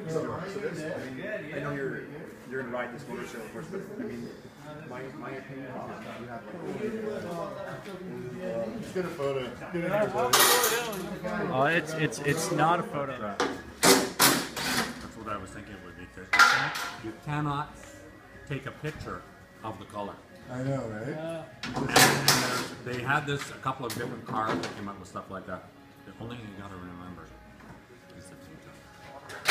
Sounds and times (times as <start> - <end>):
Inside, large room or hall: 0.0 - 18.2
Music: 0.0 - 29.5.